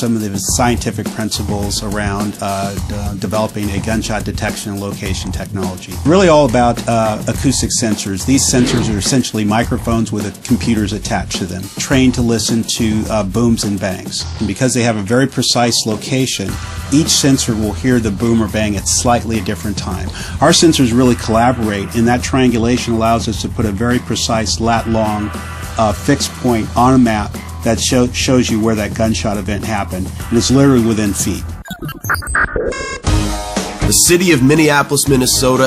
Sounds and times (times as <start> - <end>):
Speech: 0.0 - 31.5, 33.8 - 35.6
Music: 0.0 - 35.6.